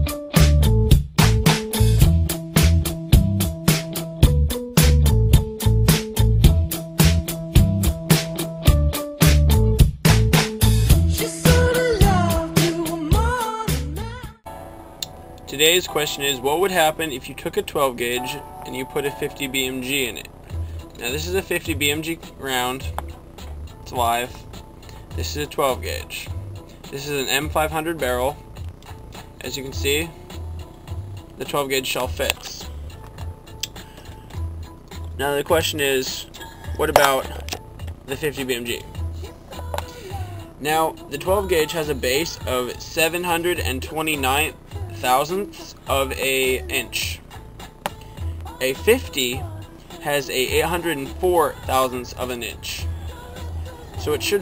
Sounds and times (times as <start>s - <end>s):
Music: 0.0s - 54.4s
Speech: 15.5s - 20.3s, 21.0s - 22.9s, 23.9s - 24.4s, 25.2s - 26.3s, 26.9s - 28.4s, 29.4s - 30.2s, 31.4s - 32.7s, 35.2s - 37.4s, 38.1s - 38.9s, 40.6s - 47.2s, 48.6s - 49.4s, 50.0s - 52.9s, 54.0s - 54.4s.